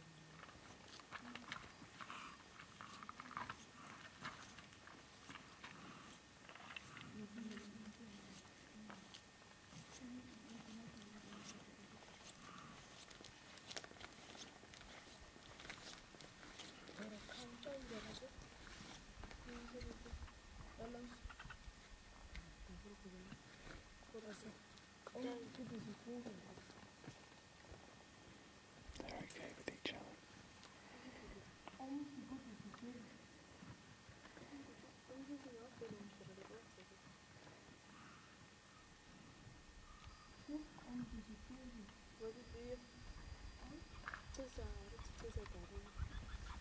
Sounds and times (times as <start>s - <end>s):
Animal: 0.0s - 24.6s, 39.8s - 46.6s
Chewing, mastication: 0.3s - 7.7s.